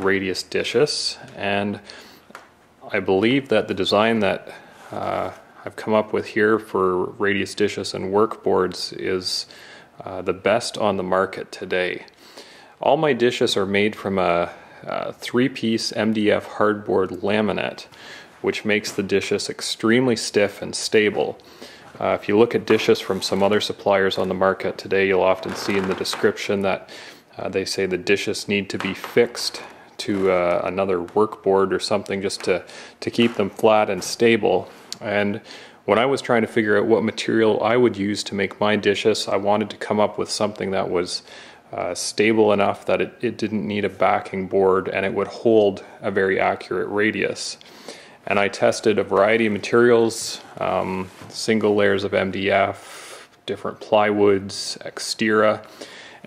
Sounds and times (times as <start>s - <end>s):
Speech: 0.0s - 1.9s, 2.8s - 12.2s, 12.8s - 47.6s, 48.3s - 56.2s.